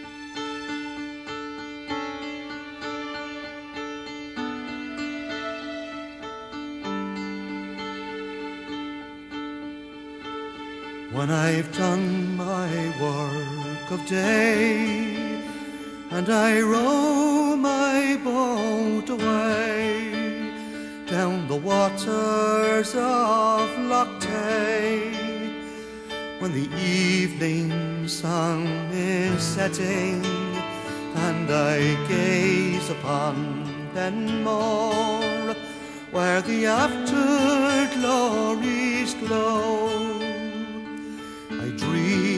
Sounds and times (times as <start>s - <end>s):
Music: 0.0s - 42.3s.